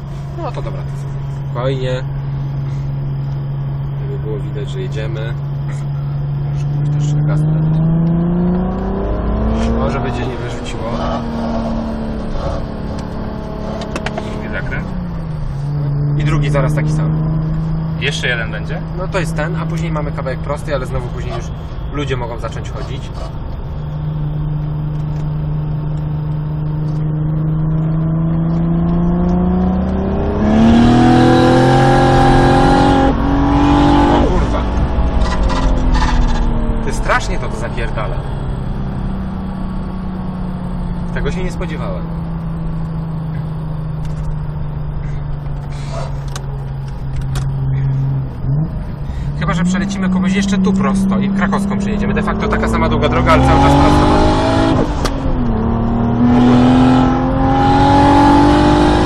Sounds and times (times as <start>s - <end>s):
Speech: 1.6s - 2.1s, 4.0s - 5.4s, 9.7s - 11.3s, 14.2s - 14.9s, 16.2s - 17.1s, 18.0s - 23.3s, 36.9s - 38.2s, 41.2s - 42.0s, 49.4s - 54.0s.